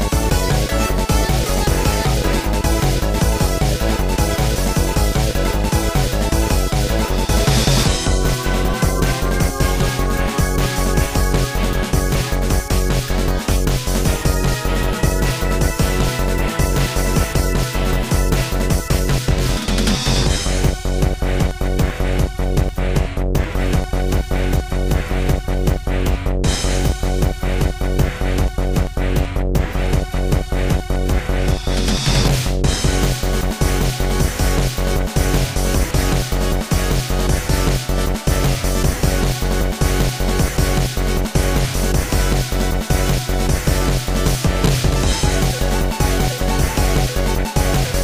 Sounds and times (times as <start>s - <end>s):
Soundtrack music: 0.0s - 48.0s.